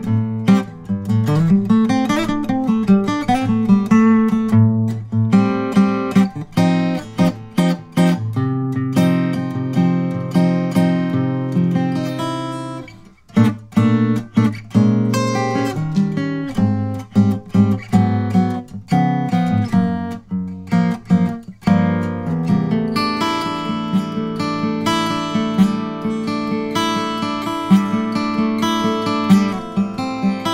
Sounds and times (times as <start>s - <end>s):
Music: 0.0s - 30.5s.